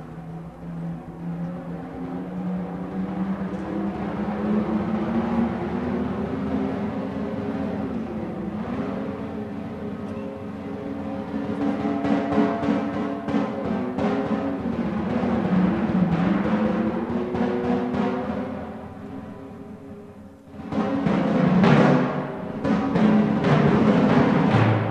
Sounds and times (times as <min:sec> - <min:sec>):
Classical music: 0:00.0 - 0:24.9
Orchestra: 0:00.0 - 0:24.9
Timpani: 0:00.0 - 0:24.9.